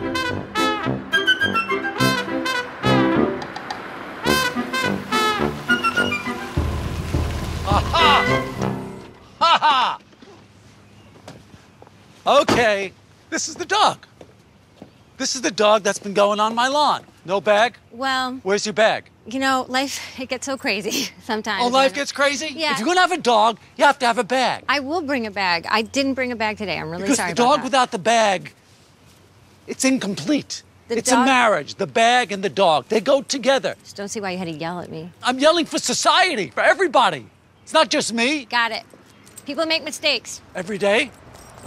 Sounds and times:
Speech: 29.7s - 33.3s.

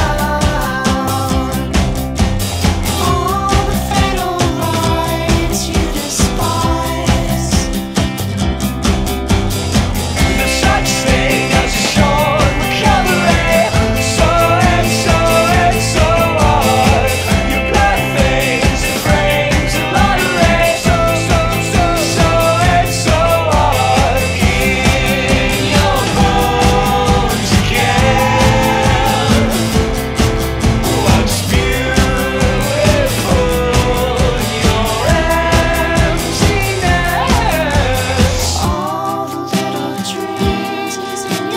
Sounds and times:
Music: 0.0s - 41.5s.

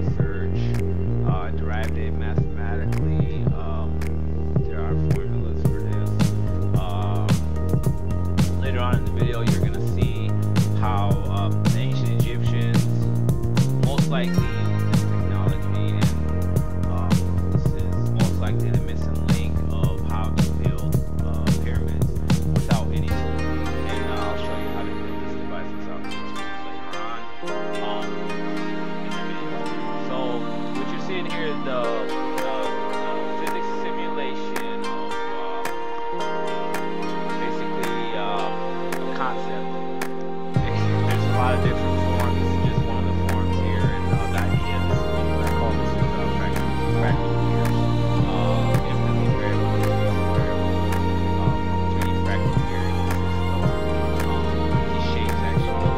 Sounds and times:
Speech: 0.0s - 7.4s, 8.6s - 13.1s, 13.8s - 28.2s, 30.0s - 35.7s, 37.3s - 39.7s, 40.6s - 47.5s, 48.2s - 52.8s, 54.7s - 55.9s.

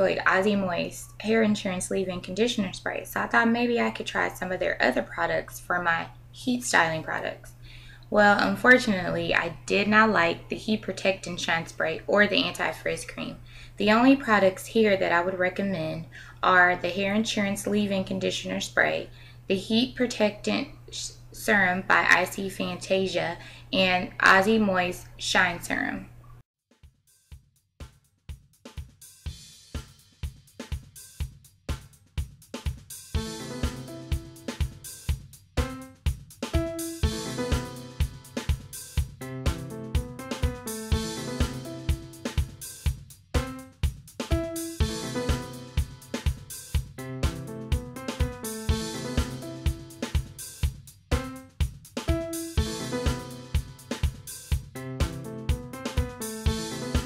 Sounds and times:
Speech: 0.0s - 26.1s.

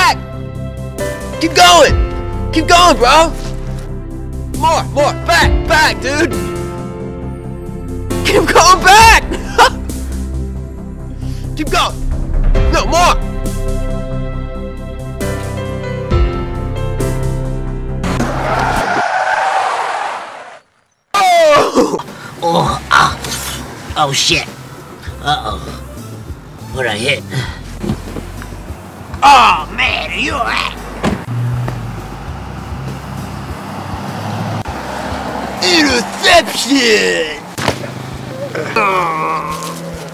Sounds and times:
Music: 0.0s - 18.8s, 21.9s - 31.2s.

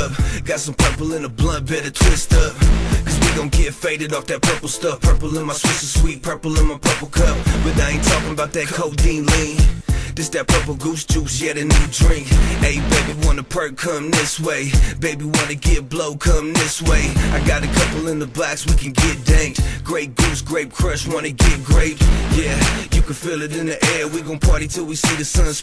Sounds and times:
Music: 0.0s - 25.6s.

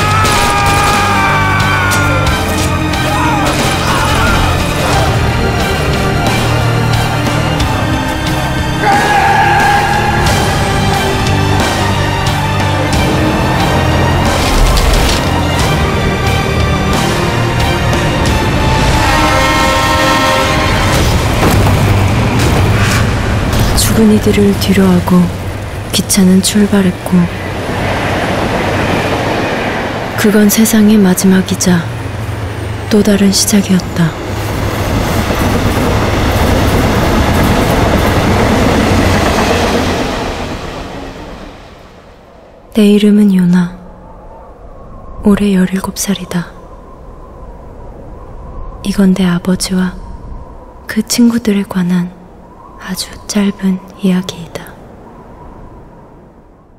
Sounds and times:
Railroad car, train wagon: 0.0s - 44.2s
Train: 0.0s - 56.7s
Speech: 23.8s - 25.4s, 26.0s - 27.4s, 30.2s - 31.9s, 32.9s - 34.2s, 42.8s - 43.8s, 45.2s - 46.6s, 48.8s - 50.0s, 50.9s - 52.2s, 52.8s - 54.8s.

